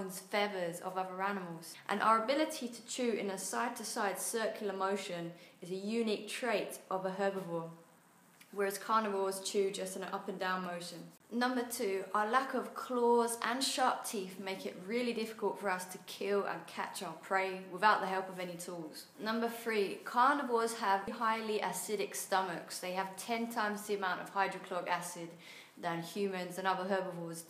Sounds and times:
Speech: 0.0 - 7.8, 8.5 - 27.4.

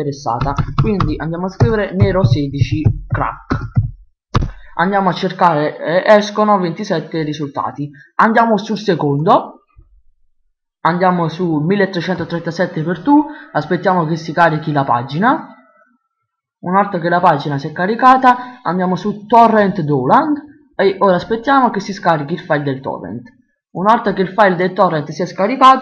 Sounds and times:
Speech: 0.0 - 3.8, 4.8 - 9.6, 10.8 - 15.9, 16.6 - 25.8.

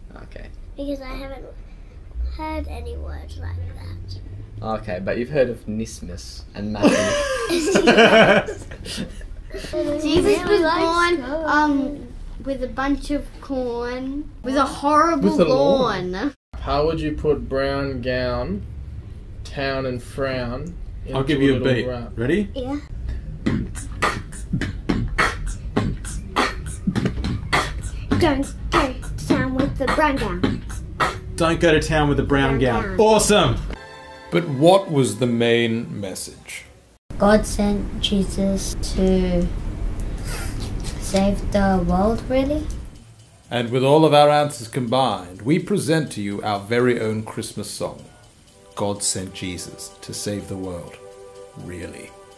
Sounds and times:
Beatboxing: 23.1 - 31.4.

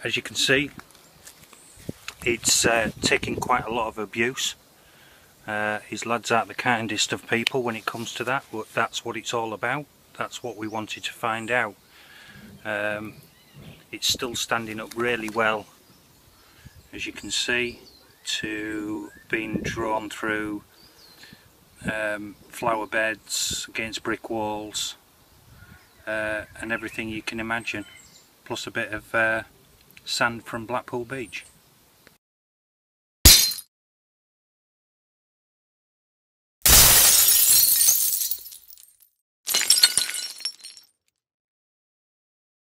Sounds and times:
Speech: 0.0 - 0.8, 2.2 - 4.6, 5.5 - 11.8, 12.6 - 13.2, 13.9 - 15.7, 16.9 - 20.6, 21.8 - 25.0, 26.1 - 27.9, 28.5 - 31.5
Shatter: 33.3 - 33.7, 36.7 - 40.9.

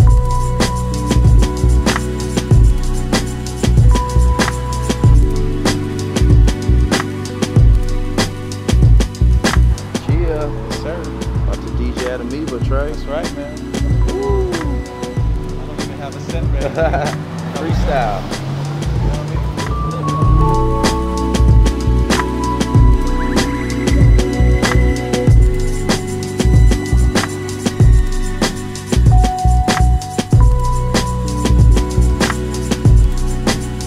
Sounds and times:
Music: 0.0 - 33.8
Speech: 10.0 - 14.8, 15.6 - 18.3, 19.0 - 20.4.

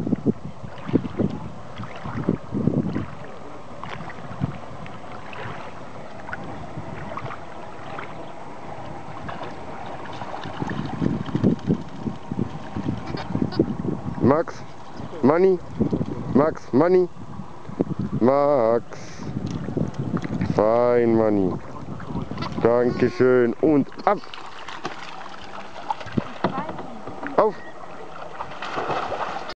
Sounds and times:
Speech: 16.4 - 17.1, 18.2 - 19.1, 20.5 - 21.9, 22.6 - 24.3.

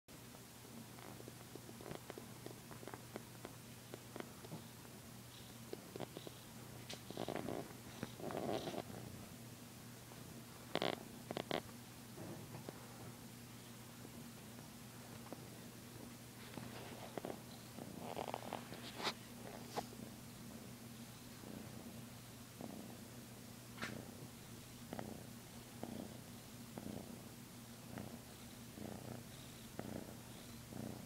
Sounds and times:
Inside, small room: 0.1 - 31.0.

